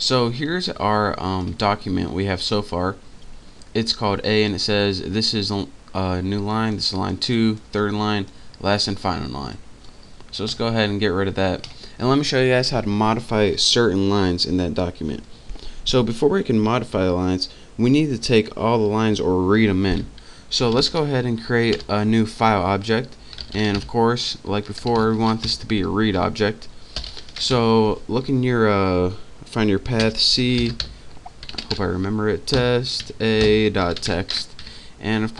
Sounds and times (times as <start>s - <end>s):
Speech: 0.0s - 3.0s, 3.7s - 9.6s, 10.3s - 26.7s, 27.4s - 30.9s, 31.7s - 35.3s.